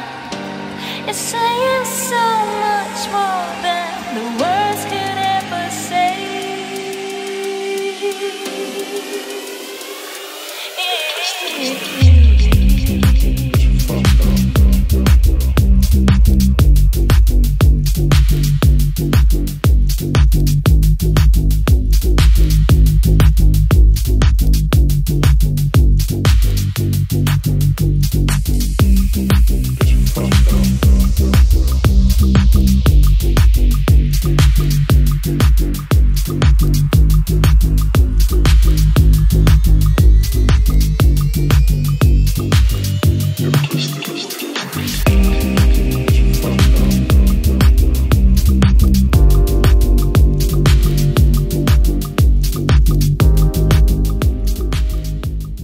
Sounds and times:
House music: 0.0s - 55.6s.

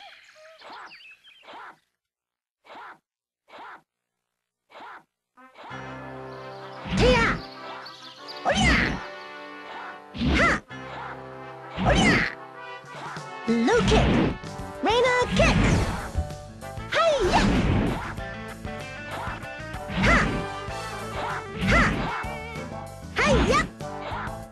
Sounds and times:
Music: 5.4s - 24.5s
Speech: 13.5s - 14.2s, 14.8s - 16.1s, 16.9s - 17.6s, 20.0s - 20.3s, 21.3s - 22.0s, 23.2s - 24.3s.

